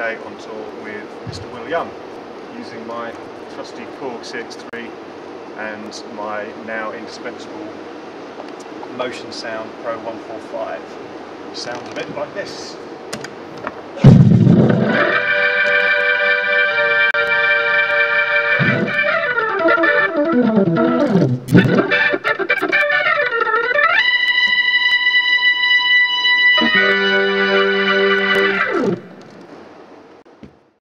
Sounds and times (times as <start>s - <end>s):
Music: 14.0s - 29.3s.